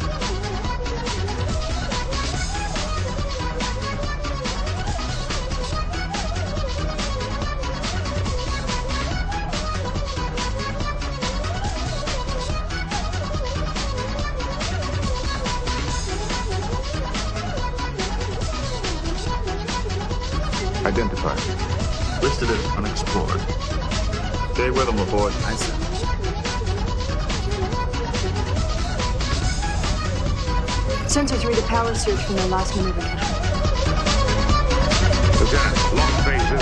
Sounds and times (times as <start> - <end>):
Music: 0.0 - 36.6.